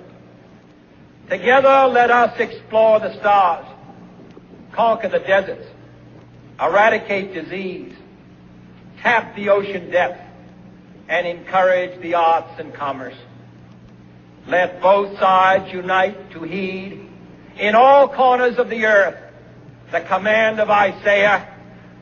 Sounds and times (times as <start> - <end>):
Narration, monologue: 0.0 - 22.0
Male speech, man speaking: 1.3 - 3.8, 4.8 - 5.8, 6.6 - 8.0, 9.0 - 10.3, 11.1 - 13.3, 14.5 - 19.3, 19.9 - 21.6.